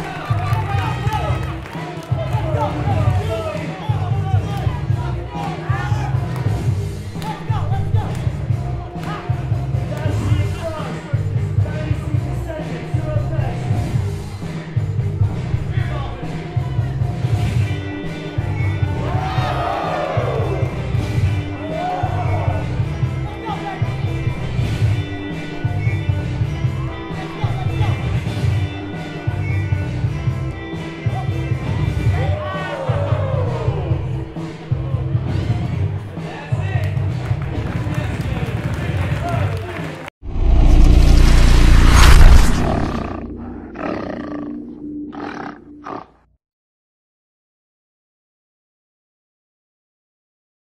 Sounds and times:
Music: 0.0 - 40.1, 43.3 - 46.3.

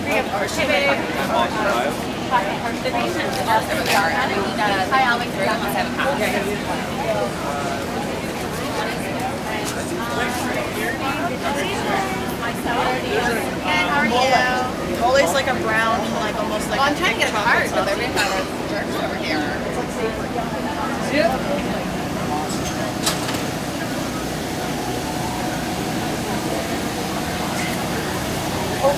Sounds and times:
Speech: 0.0 - 28.9.

